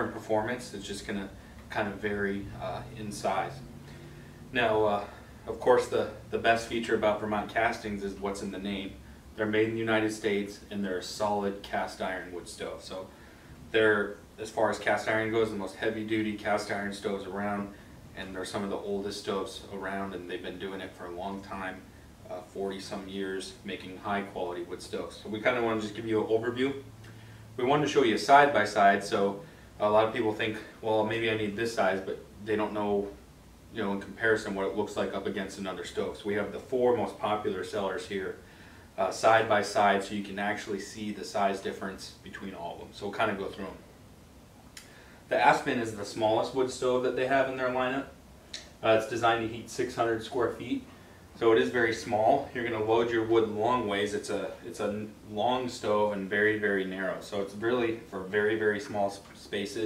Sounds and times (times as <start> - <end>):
Speech: 0.0 - 3.7, 4.5 - 26.9, 27.6 - 43.9, 45.3 - 59.8.